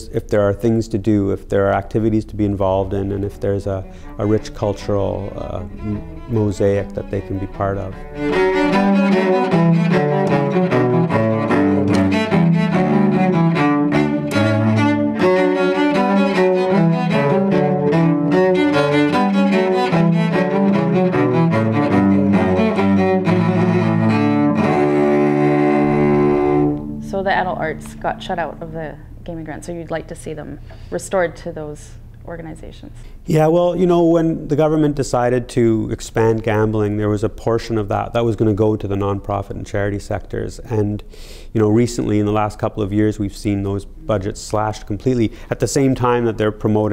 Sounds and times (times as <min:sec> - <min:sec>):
Double bass: 0:00.0 - 0:29.4, 0:33.1 - 0:46.9
Cello: 0:00.0 - 0:29.9.